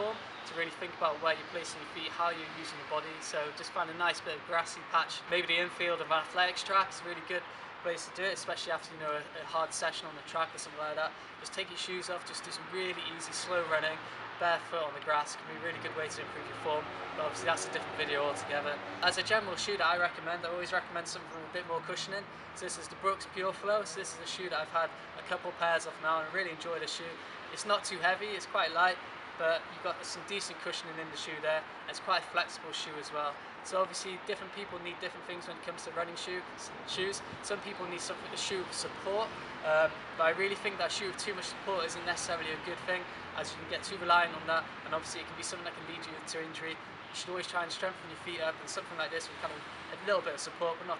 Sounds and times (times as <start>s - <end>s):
Outside, urban or manmade: 0.0s - 51.0s
Speech: 0.0s - 51.0s.